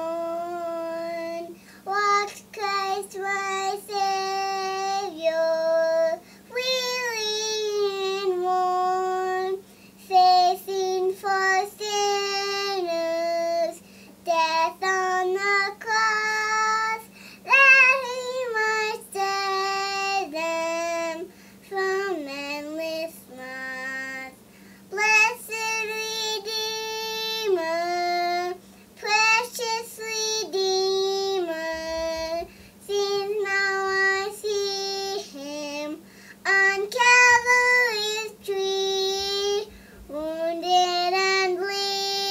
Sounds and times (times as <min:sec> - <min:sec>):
Child singing: 0:00.0 - 0:42.3.